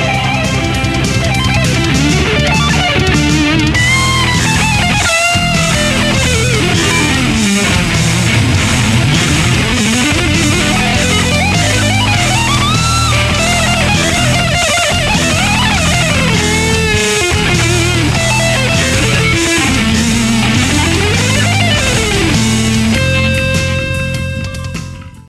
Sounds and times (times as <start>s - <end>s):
Electric guitar: 0.0s - 25.2s.